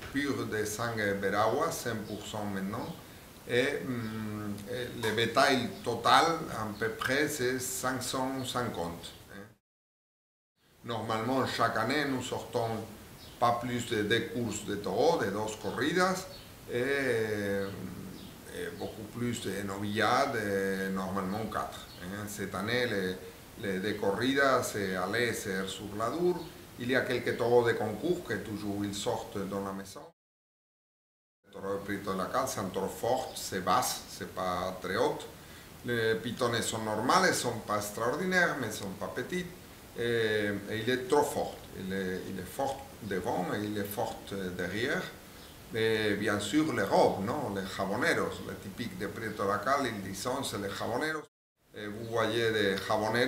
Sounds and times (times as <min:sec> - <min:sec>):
Speech: 0:00.0 - 0:09.6, 0:10.8 - 0:30.2, 0:31.5 - 0:53.2.